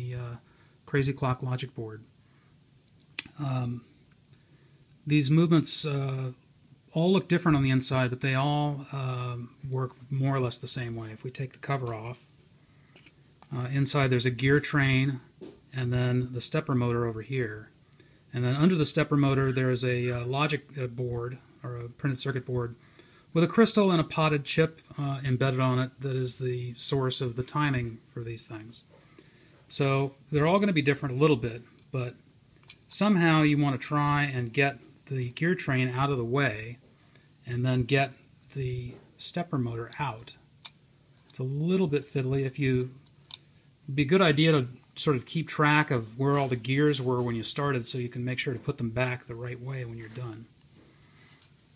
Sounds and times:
Speech: 0:00.0 - 0:02.1, 0:03.2 - 0:03.9, 0:05.0 - 0:12.3, 0:13.5 - 0:17.7, 0:18.3 - 0:28.9, 0:29.7 - 0:32.2, 0:32.9 - 0:36.8, 0:37.4 - 0:40.4, 0:41.4 - 0:43.0, 0:43.9 - 0:50.5.

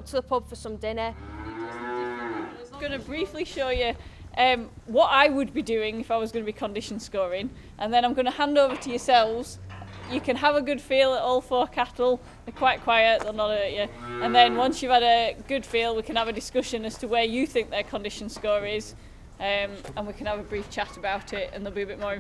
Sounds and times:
Speech: 0:02.0 - 0:22.2.

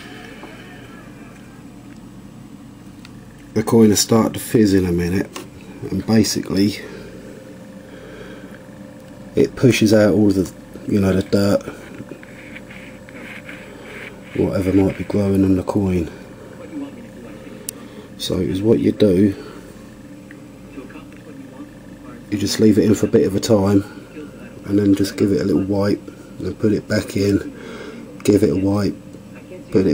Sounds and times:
Speech: 0:03.6 - 0:06.9, 0:09.4 - 0:11.8, 0:14.4 - 0:17.6, 0:18.2 - 0:19.4, 0:20.7 - 0:27.5, 0:28.2 - 0:29.9.

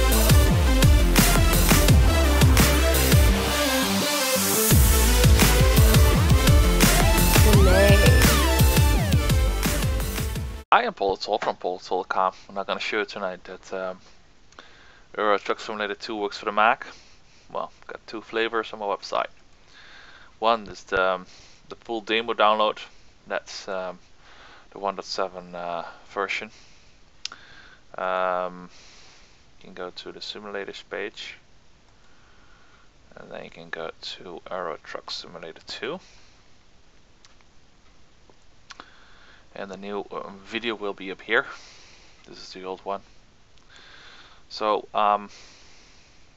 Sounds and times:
Speech: 0:07.4 - 0:08.4, 0:10.7 - 0:14.0, 0:15.2 - 0:16.9, 0:17.5 - 0:19.3, 0:20.4 - 0:24.0, 0:24.8 - 0:26.5, 0:28.0 - 0:28.7, 0:29.6 - 0:31.4, 0:33.1 - 0:36.0, 0:39.6 - 0:41.6, 0:42.3 - 0:43.0, 0:44.5 - 0:45.3.

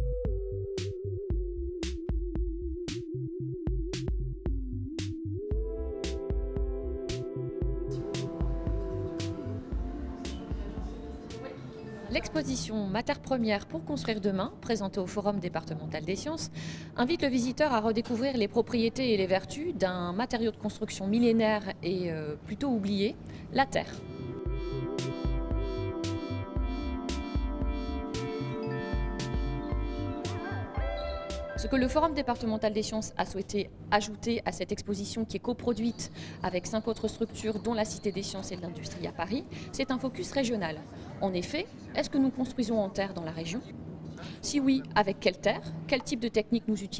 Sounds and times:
Music: 0:00.0 - 0:12.7, 0:23.8 - 0:33.6
Speech: 0:10.2 - 0:24.0, 0:31.6 - 0:46.9.

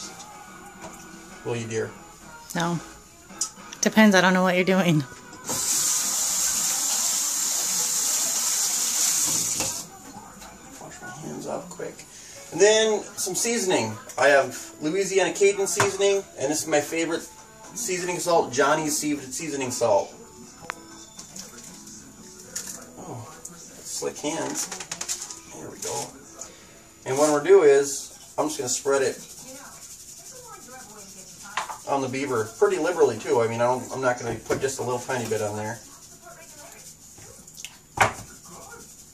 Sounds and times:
Water tap, faucet: 0:05.4 - 0:09.9, 0:27.1 - 0:39.1
Sink (filling or washing): 0:05.4 - 0:10.0, 0:27.0 - 0:39.1.

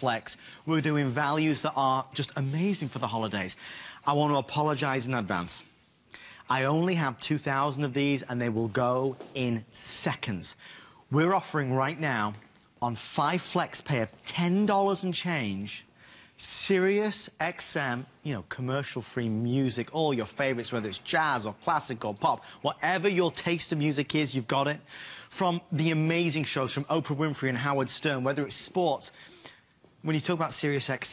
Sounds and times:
Speech: 0:00.0 - 0:05.8, 0:06.5 - 0:29.2, 0:30.0 - 0:31.1.

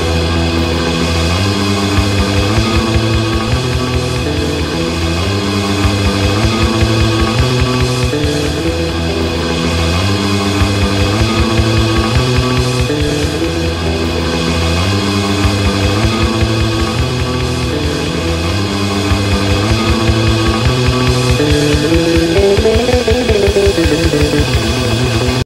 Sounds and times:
Music: 0:00.0 - 0:25.4.

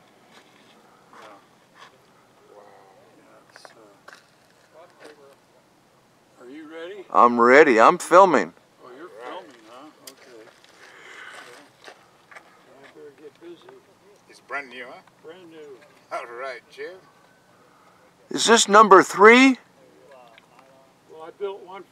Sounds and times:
Outside, rural or natural: 0:00.0 - 0:21.9.

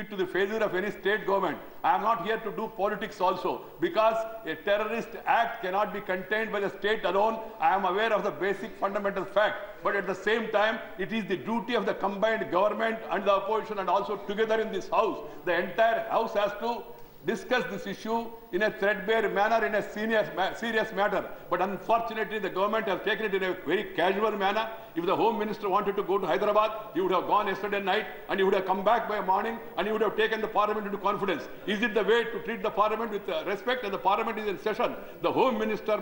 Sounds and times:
Male speech, man speaking: 0:00.0 - 0:36.0
Narration, monologue: 0:00.0 - 0:36.0.

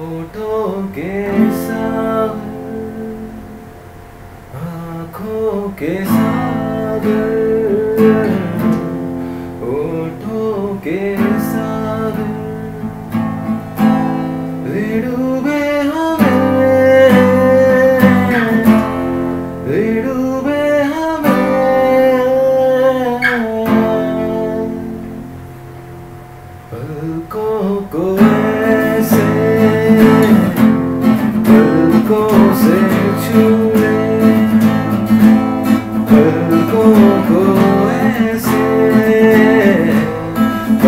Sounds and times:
Acoustic guitar: 0:00.0 - 0:40.8
Strum: 0:00.0 - 0:40.8
Electric guitar: 0:04.4 - 0:40.8.

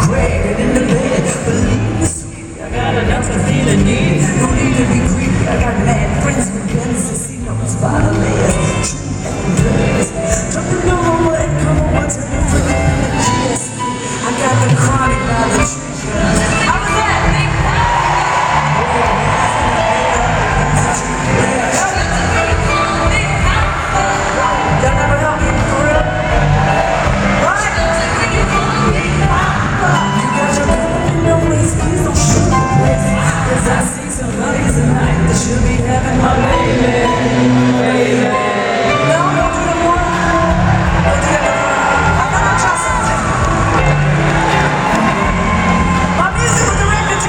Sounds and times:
Speech: 0:00.0 - 0:26.2, 0:27.4 - 0:37.2, 0:46.2 - 0:47.2
Female singing: 0:00.0 - 0:26.3, 0:27.4 - 0:43.9
Music: 0:00.0 - 0:47.2.

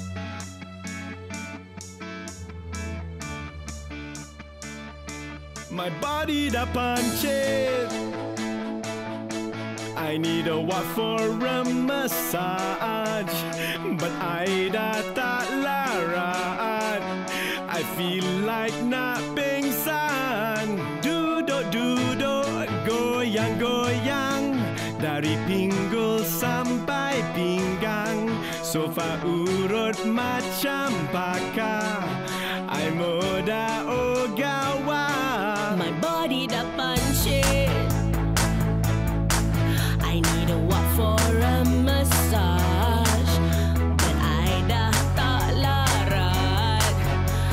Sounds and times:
Blues: 0:00.0 - 0:47.5.

